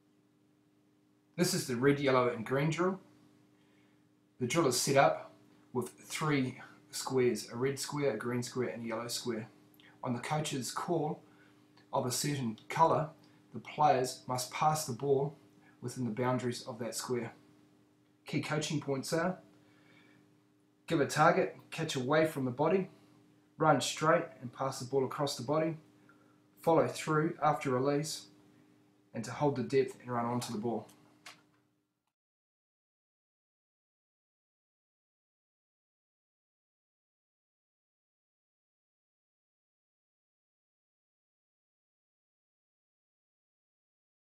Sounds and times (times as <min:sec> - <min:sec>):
Speech: 0:01.4 - 0:03.1, 0:04.4 - 0:11.2, 0:11.9 - 0:17.4, 0:18.3 - 0:19.5, 0:20.9 - 0:23.0, 0:23.6 - 0:25.9, 0:26.6 - 0:28.4, 0:29.1 - 0:31.0.